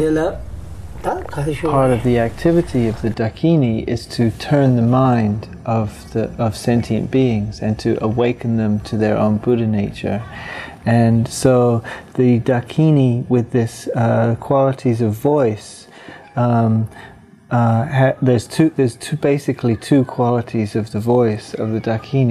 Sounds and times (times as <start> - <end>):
Speech: 0.0 - 0.4, 1.0 - 16.9, 17.5 - 22.3.